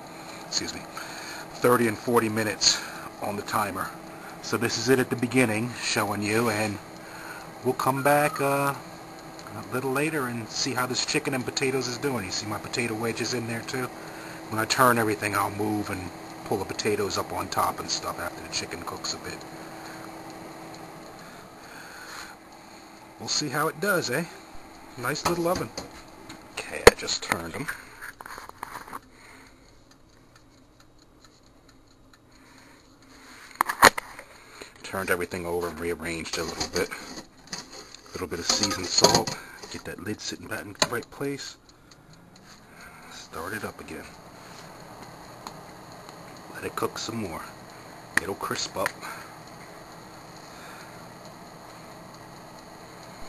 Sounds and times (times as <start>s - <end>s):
Speech: 0.5s - 0.9s, 1.6s - 6.8s, 7.6s - 8.8s, 9.5s - 13.9s, 14.5s - 19.4s, 23.2s - 24.4s, 25.0s - 25.7s, 26.6s - 27.8s, 34.8s - 37.1s, 38.1s - 41.6s, 43.1s - 44.1s, 46.5s - 47.6s, 48.2s - 49.2s.